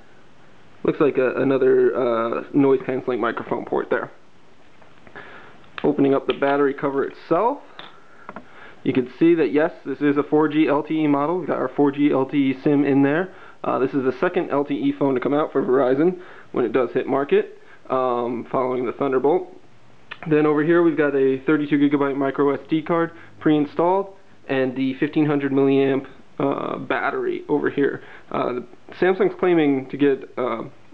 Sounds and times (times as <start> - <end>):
Speech: 0.8 - 4.2, 5.8 - 8.0, 8.8 - 30.9.